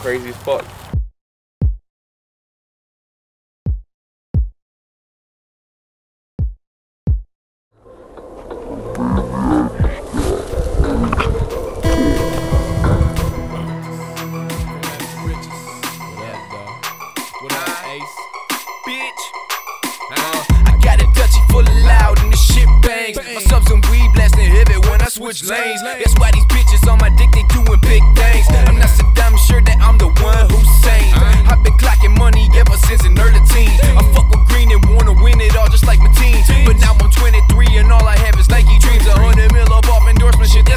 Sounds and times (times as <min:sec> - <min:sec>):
Music: 0:11.9 - 0:25.1, 0:26.1 - 0:40.7.